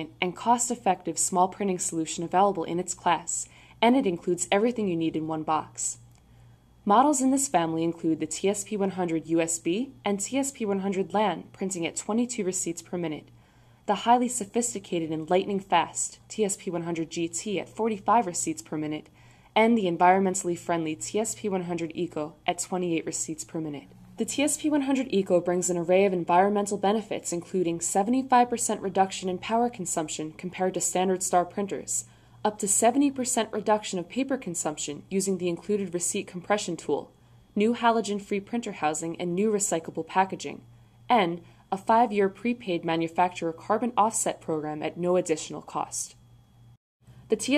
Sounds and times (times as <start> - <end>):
Speech: 0.0 - 6.0, 6.9 - 13.3, 13.9 - 46.2, 47.3 - 47.5.